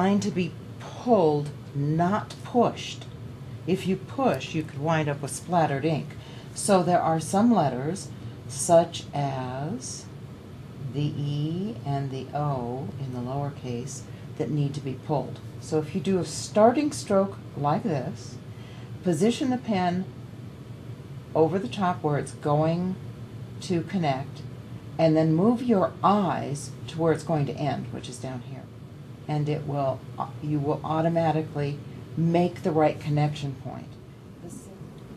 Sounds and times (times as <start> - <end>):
Speech: 0.0 - 3.1, 3.7 - 10.1, 10.9 - 18.4, 29.3 - 34.8.